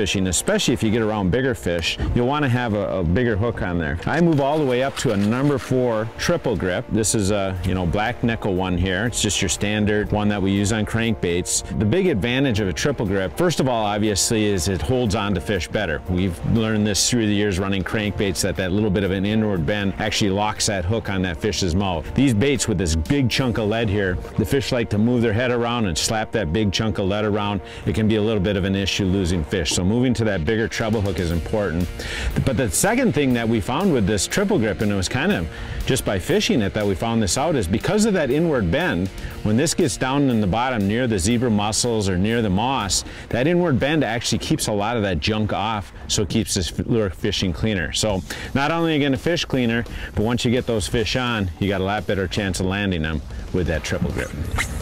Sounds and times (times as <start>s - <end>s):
Speech: 0.0s - 54.4s
Music: 0.0s - 54.8s.